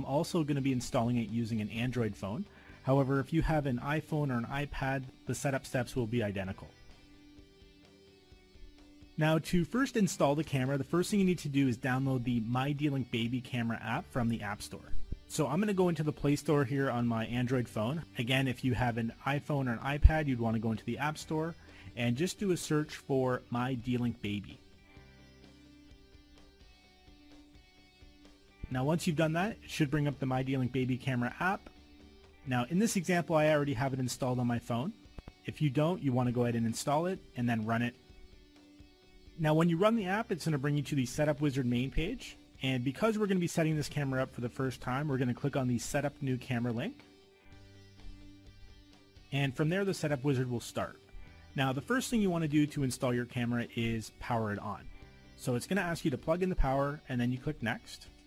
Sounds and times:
Speech: 0:00.0 - 0:06.8, 0:09.2 - 0:24.6, 0:28.7 - 0:31.6, 0:32.5 - 0:38.0, 0:39.4 - 0:47.0, 0:49.3 - 0:51.0, 0:51.6 - 0:58.1
Music: 0:00.0 - 0:58.2.

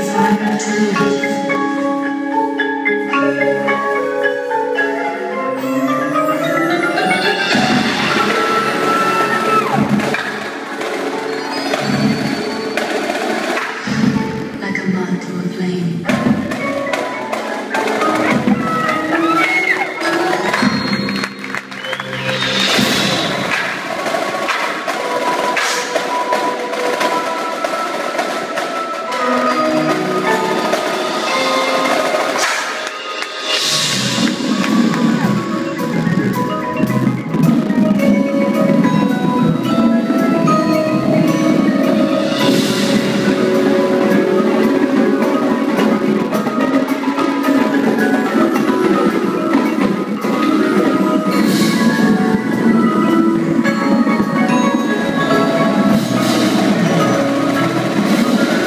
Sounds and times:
Music: 0:00.0 - 0:58.6
Speech: 0:14.6 - 0:16.1.

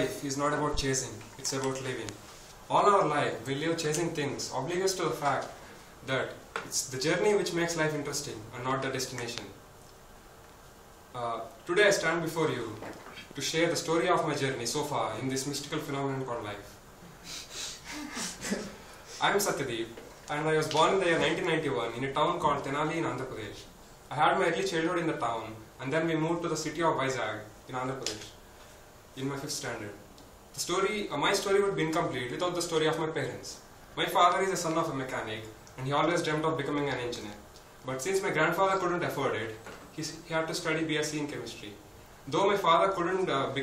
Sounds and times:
Male speech, man speaking: 0:00.0 - 0:09.6, 0:11.2 - 0:16.8, 0:19.2 - 0:28.4, 0:29.2 - 0:30.0, 0:30.6 - 0:43.6
Narration, monologue: 0:00.0 - 0:43.6.

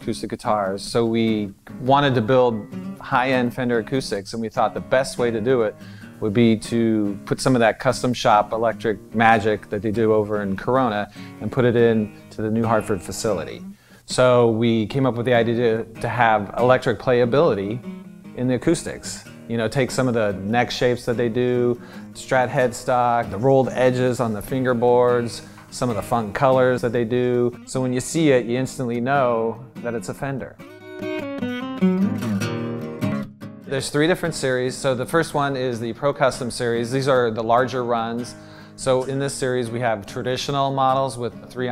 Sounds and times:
Speech: 0:00.0 - 0:17.8, 0:18.4 - 0:30.6, 0:33.7 - 0:41.7
Music: 0:00.0 - 0:41.7.

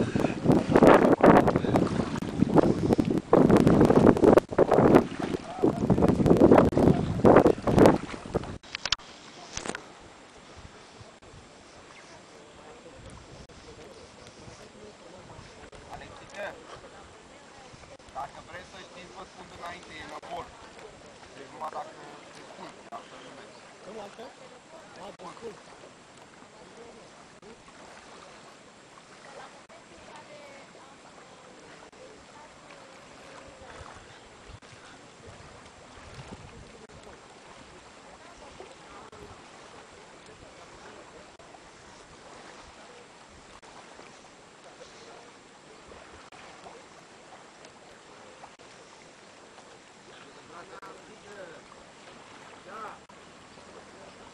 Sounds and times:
Wind noise (microphone): 0:00.0 - 0:09.0, 0:13.0 - 0:13.7, 0:33.6 - 0:37.0.

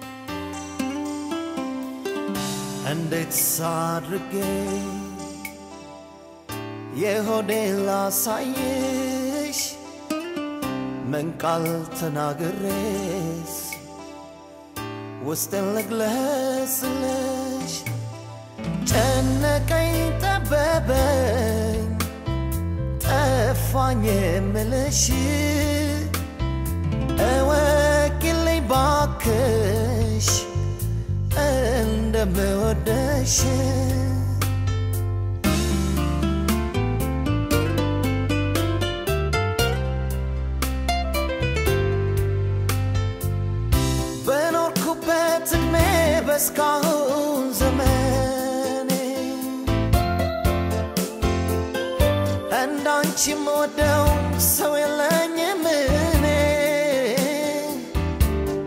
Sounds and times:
Music: 0:00.0 - 0:58.6.

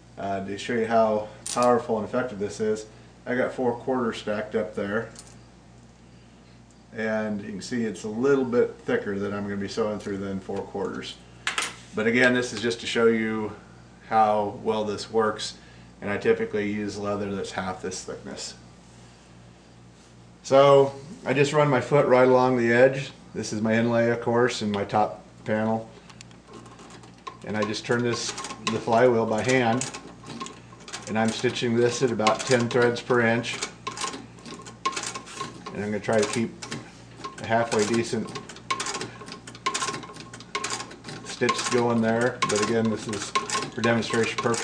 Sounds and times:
Speech: 0:00.2 - 0:05.2, 0:06.9 - 0:11.2, 0:12.0 - 0:18.6, 0:20.4 - 0:25.9, 0:27.4 - 0:29.9, 0:31.1 - 0:33.6, 0:35.7 - 0:36.7, 0:37.4 - 0:38.4, 0:41.3 - 0:44.6.

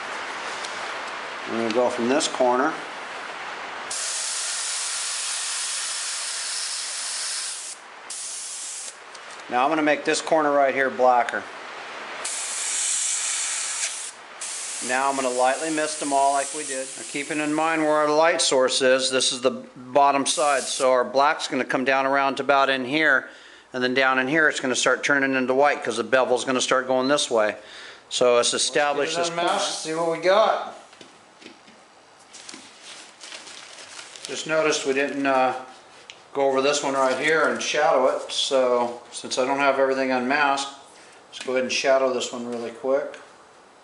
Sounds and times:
Hiss: 0:03.9 - 0:09.0, 0:12.2 - 0:17.7, 0:20.4 - 0:20.9.

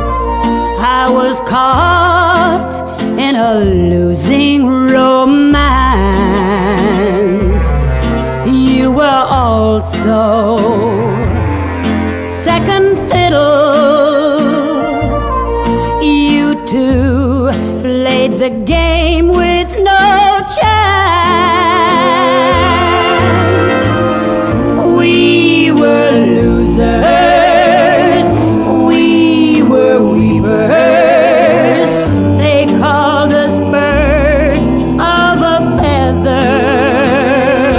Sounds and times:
Violin, fiddle: 0:10.8 - 0:17.0, 0:21.8 - 0:28.9.

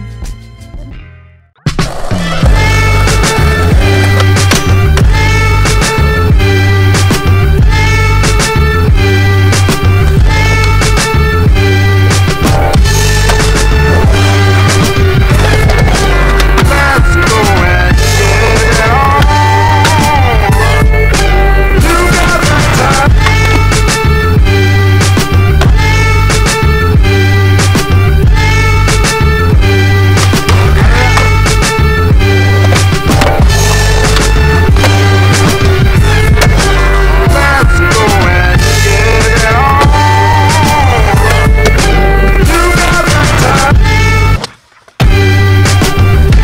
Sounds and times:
Music: 0:00.0 - 0:46.4
Skateboard: 0:01.7 - 0:06.0, 0:13.2 - 0:20.4, 0:21.8 - 0:24.1, 0:30.2 - 0:31.9.

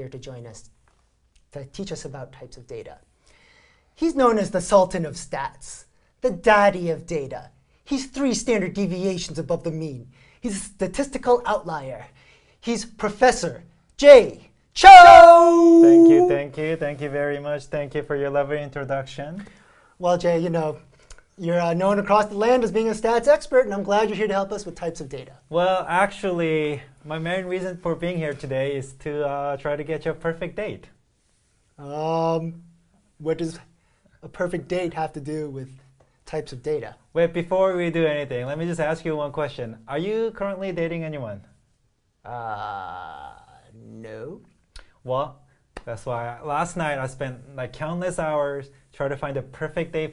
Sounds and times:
Speech: 0:00.0 - 0:00.7, 0:01.5 - 0:03.1, 0:04.0 - 0:31.0, 0:31.8 - 0:32.6, 0:33.2 - 0:41.6, 0:42.2 - 0:50.1.

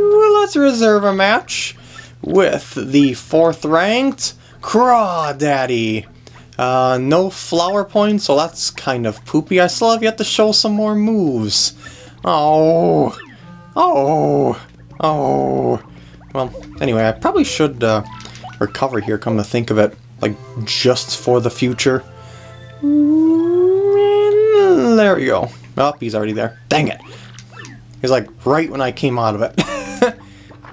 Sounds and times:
Speech: 0:00.0 - 0:13.2, 0:13.8 - 0:15.8, 0:16.4 - 0:22.0, 0:22.8 - 0:27.1, 0:28.0 - 0:29.6
Music: 0:10.8 - 0:25.9, 0:27.3 - 0:30.7.

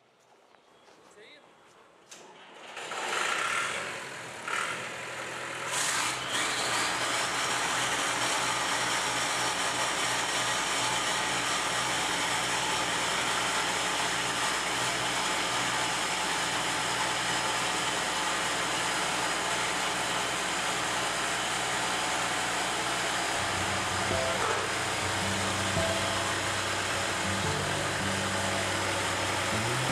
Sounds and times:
Outside, urban or manmade: 0:00.0 - 0:29.9
Vehicle: 0:02.1 - 0:29.9
Music: 0:23.4 - 0:29.9.

